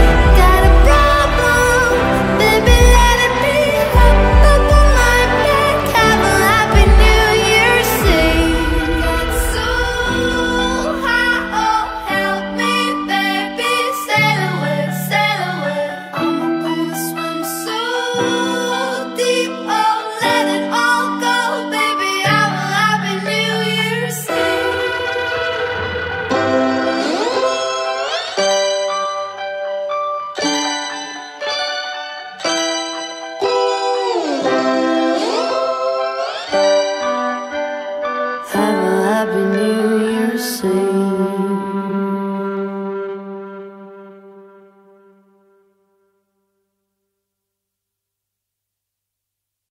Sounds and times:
Music: 0:00.0 - 0:47.0.

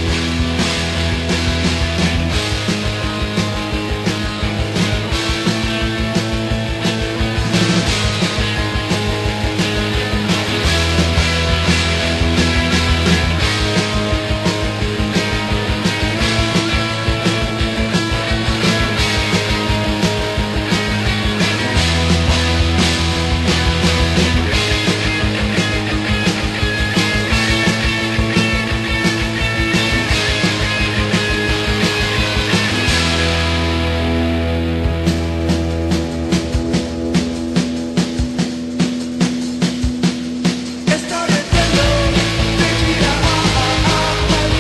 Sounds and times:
Music: 0:00.0 - 0:44.6.

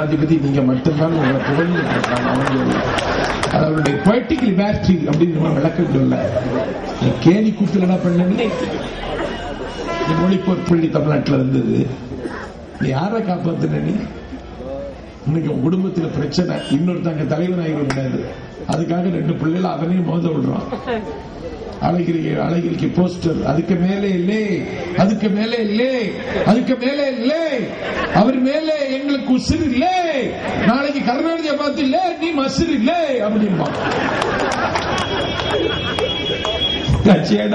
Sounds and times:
Male speech, man speaking: 0:00.0 - 0:02.8, 0:03.6 - 0:08.6, 0:10.1 - 0:12.0, 0:12.8 - 0:14.1, 0:15.3 - 0:20.7, 0:21.8 - 0:33.8, 0:36.9 - 0:37.5
Narration, monologue: 0:00.0 - 0:08.6, 0:10.1 - 0:20.7, 0:21.8 - 0:34.2.

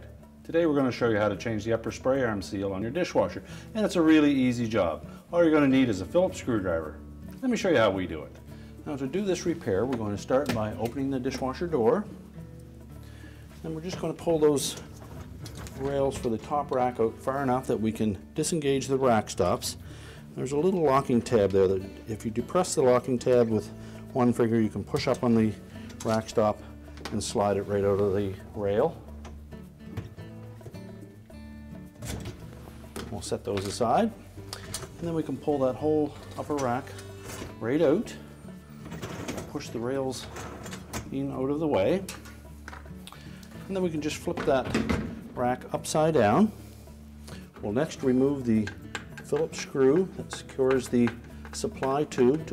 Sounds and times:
Speech: 0:00.0 - 0:12.1, 0:13.6 - 0:14.9, 0:15.7 - 0:19.8, 0:20.4 - 0:29.0, 0:33.0 - 0:34.2, 0:35.0 - 0:37.0, 0:37.6 - 0:38.2, 0:39.4 - 0:40.4, 0:41.0 - 0:42.2, 0:43.7 - 0:46.6, 0:47.6 - 0:52.5
Music: 0:00.0 - 0:52.5.

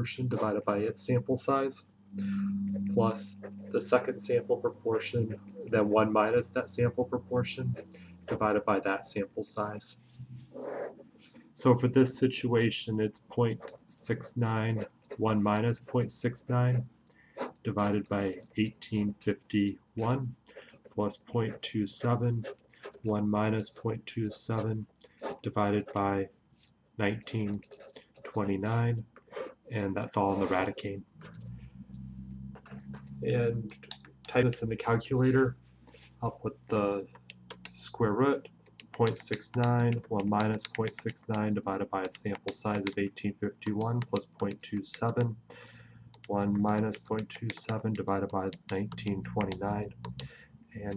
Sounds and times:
Speech: 0:00.0 - 0:10.0, 0:11.6 - 0:16.9, 0:17.6 - 0:26.3, 0:27.0 - 0:27.6, 0:28.3 - 0:29.1, 0:29.7 - 0:31.1, 0:33.2 - 0:35.6, 0:36.2 - 0:37.1, 0:37.8 - 0:45.4, 0:46.2 - 0:50.0, 0:50.8 - 0:50.9.

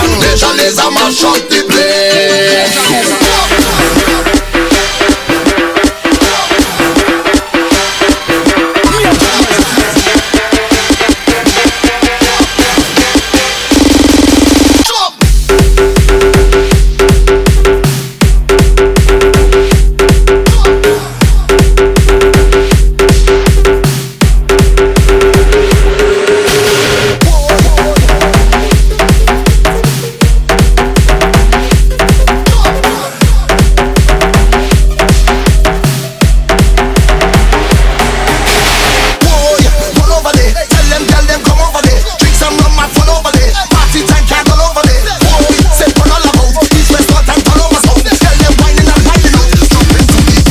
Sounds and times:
Music: 0:00.0 - 0:50.5.

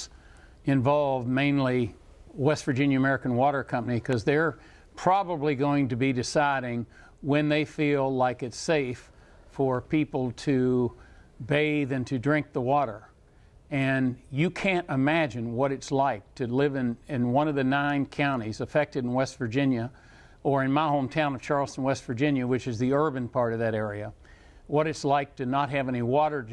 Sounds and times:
Speech: 0:00.7 - 0:13.1, 0:13.7 - 0:26.5.

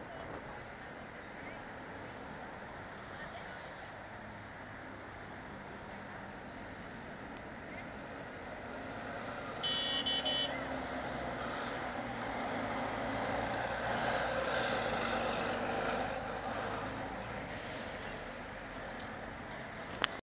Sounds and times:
Bus: 0:00.0 - 0:20.2.

